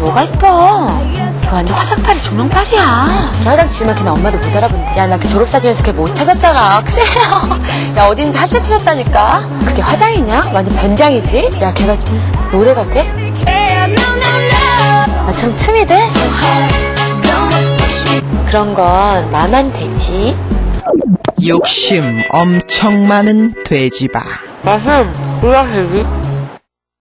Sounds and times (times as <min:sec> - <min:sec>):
Music: 0:00.0 - 0:26.6
Speech: 0:21.4 - 0:26.1.